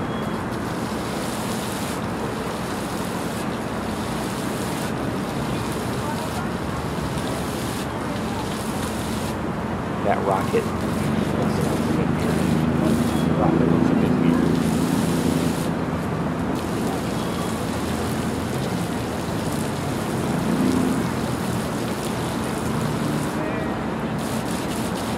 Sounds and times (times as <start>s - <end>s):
Speech: 5.4s - 8.7s, 10.0s - 14.8s, 23.4s - 24.0s.